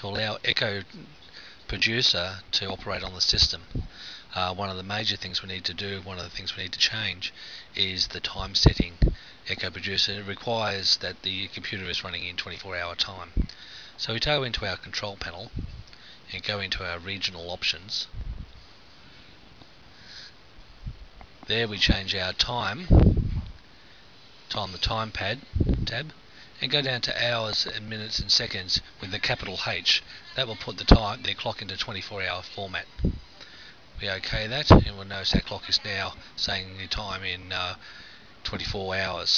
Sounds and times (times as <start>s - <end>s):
Speech: 0.0s - 3.7s, 4.3s - 13.4s, 14.0s - 15.6s, 16.3s - 18.1s, 21.5s - 23.0s, 24.5s - 33.0s, 34.0s - 37.8s, 38.4s - 39.3s.